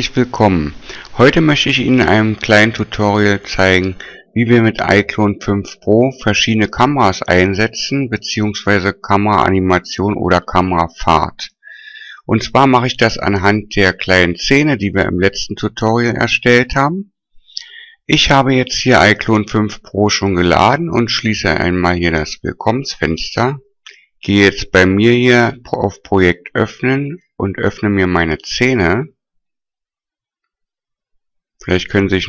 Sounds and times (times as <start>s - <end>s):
Speech: 0.0s - 29.2s, 31.6s - 32.2s.